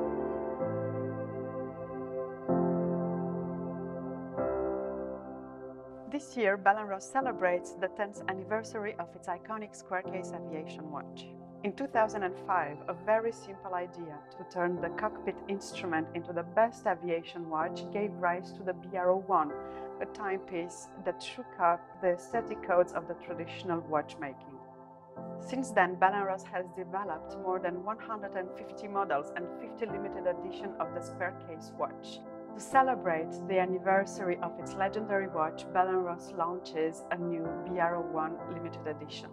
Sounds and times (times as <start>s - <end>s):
Music: 0.0s - 39.3s
Speech: 6.1s - 24.6s, 25.4s - 39.3s.